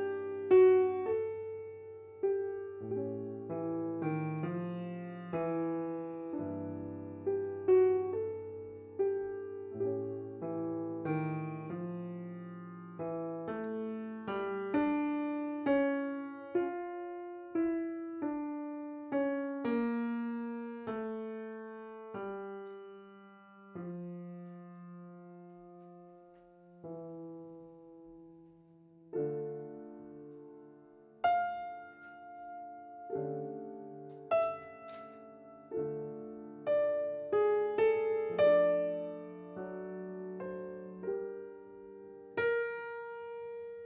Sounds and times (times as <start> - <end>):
Piano: 0.0 - 43.8.